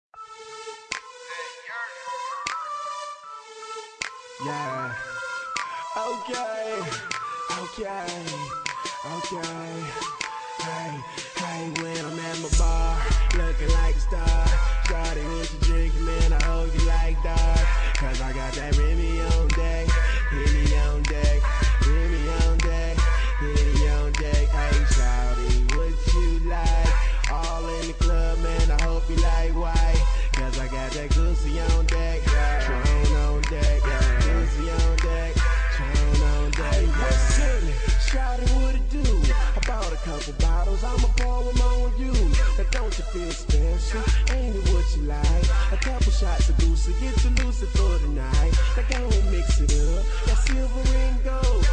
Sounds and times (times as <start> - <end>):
Music: 0.2 - 51.7.